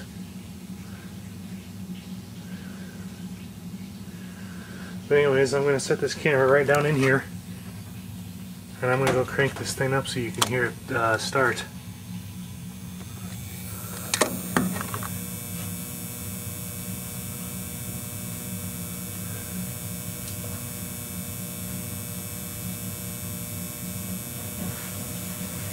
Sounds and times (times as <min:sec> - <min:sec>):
Speech: 0:05.1 - 0:07.3, 0:08.8 - 0:11.8.